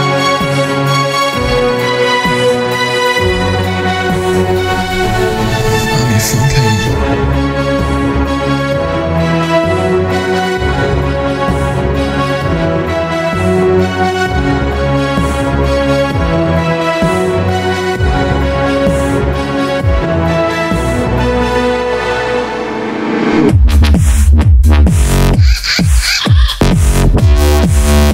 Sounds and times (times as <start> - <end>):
Orchestra: 0.0 - 23.5.